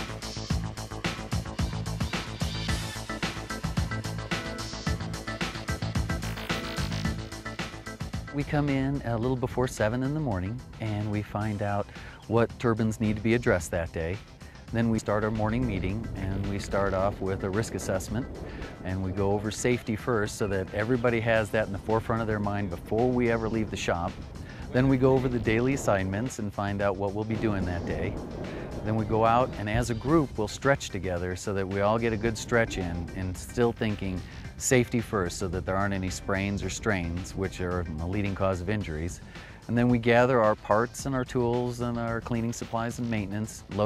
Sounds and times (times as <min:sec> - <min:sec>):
Music: 0:00.0 - 0:43.8
Speech: 0:08.3 - 0:28.2, 0:28.8 - 0:43.8.